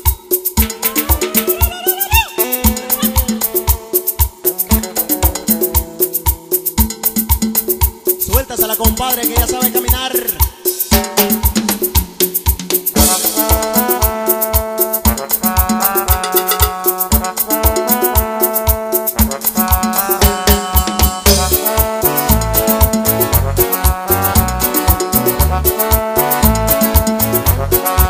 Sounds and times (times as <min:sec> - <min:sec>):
Music: 0:00.0 - 0:28.0.